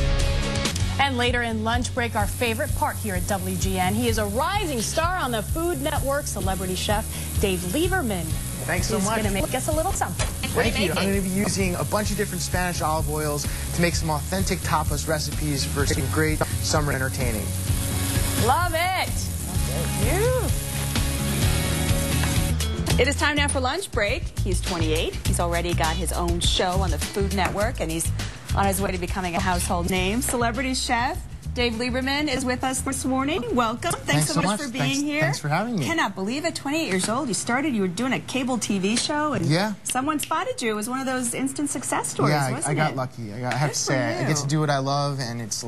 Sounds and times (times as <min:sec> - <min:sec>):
Music: 0:00.0 - 0:38.0.